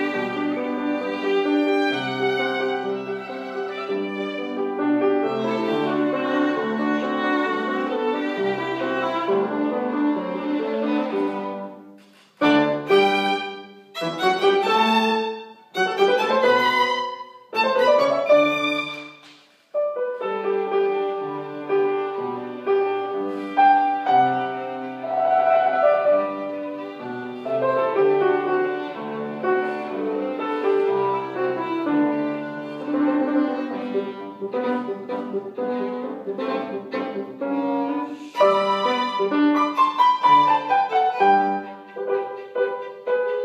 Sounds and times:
Violin, fiddle: 0.0s - 11.8s, 12.4s - 19.3s, 20.7s - 43.4s.

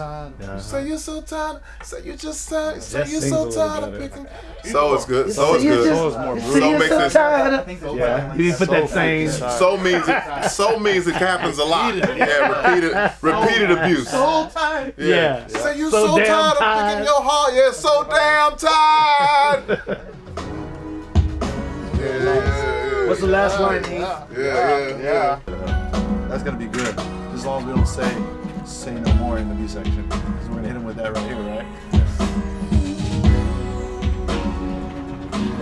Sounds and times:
Speech: 1.9s - 19.7s, 26.3s - 31.7s
Music: 2.0s - 7.2s, 8.8s - 14.2s, 15.0s - 35.6s.

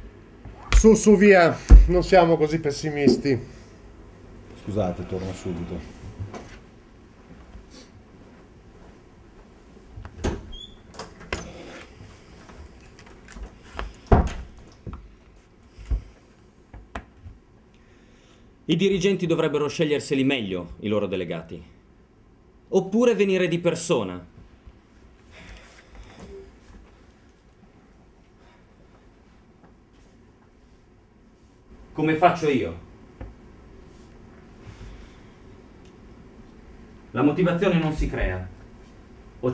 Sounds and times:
Speech: 0.8s - 3.5s, 4.6s - 5.9s, 18.7s - 21.7s, 22.7s - 24.3s, 32.0s - 32.9s, 37.1s - 38.6s.

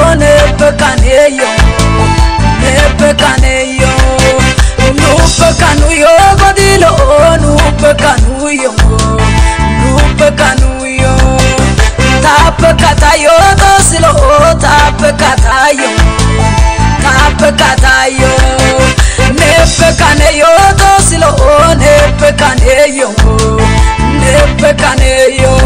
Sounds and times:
Music of Africa: 0.0s - 25.6s.

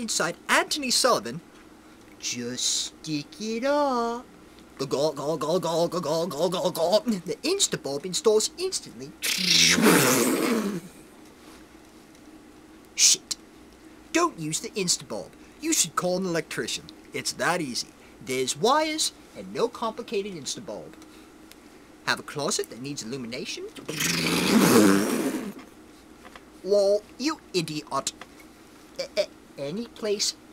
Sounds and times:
Speech: 0.0s - 1.4s, 2.2s - 9.9s, 13.0s - 13.4s, 14.1s - 21.0s, 22.1s - 24.4s, 26.6s - 28.2s, 29.0s - 30.4s
Inside, small room: 0.0s - 30.5s.

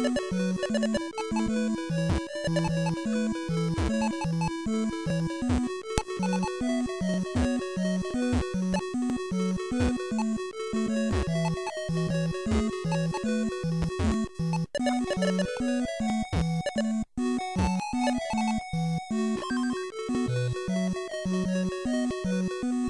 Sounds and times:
Video game music: 0.0s - 22.9s.

